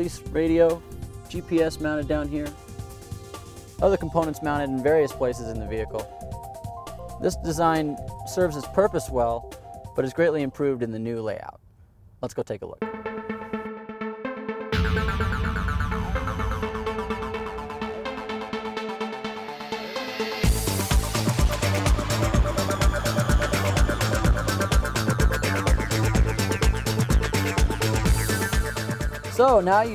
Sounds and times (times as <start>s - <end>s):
Speech: 0.0s - 2.5s, 3.8s - 6.1s, 7.2s - 9.4s, 10.0s - 11.6s, 12.2s - 12.8s, 29.3s - 29.9s
Music: 0.0s - 11.2s, 12.8s - 29.9s.